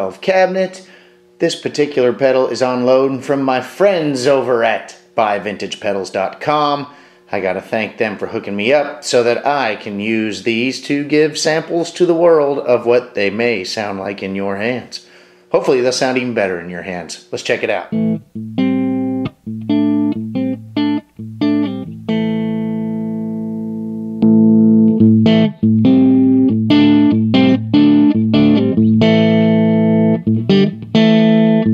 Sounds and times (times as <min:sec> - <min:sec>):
Speech: 0:00.0 - 0:18.0
Distortion: 0:00.0 - 0:31.7
Music: 0:17.9 - 0:31.7.